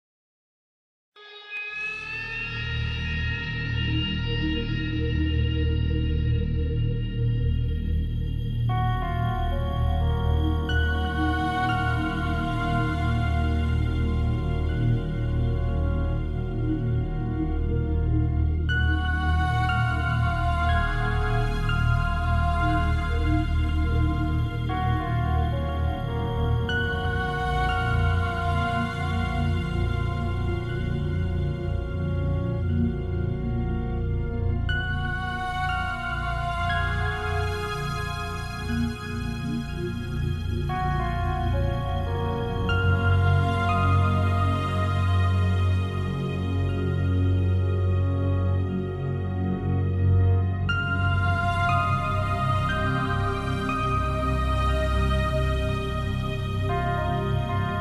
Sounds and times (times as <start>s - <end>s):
Electronic music: 7.9s - 57.8s.